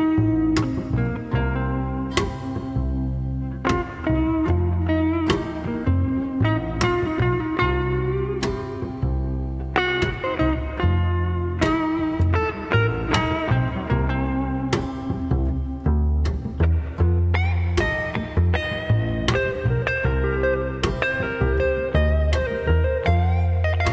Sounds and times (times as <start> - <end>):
Steel guitar, slide guitar: 0.0 - 23.9.